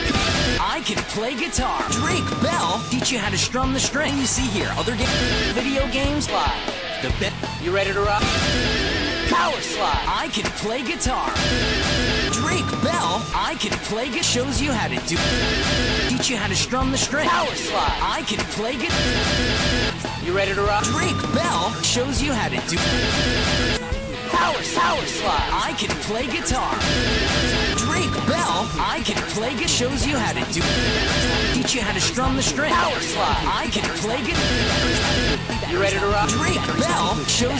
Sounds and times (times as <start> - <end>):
Music: 0.0 - 37.5
Speech: 0.6 - 8.3, 9.3 - 11.4, 12.3 - 15.4, 16.1 - 19.2, 20.0 - 23.2, 24.2 - 26.9, 27.7 - 37.5.